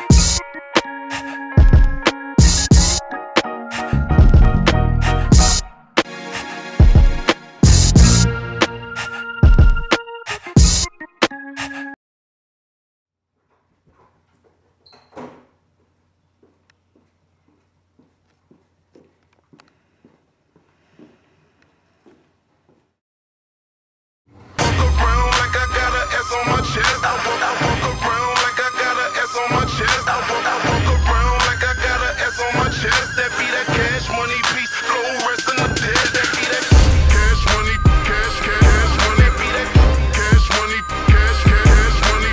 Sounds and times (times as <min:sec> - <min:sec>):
Music: 0:00.0 - 0:12.0, 0:24.4 - 0:42.3.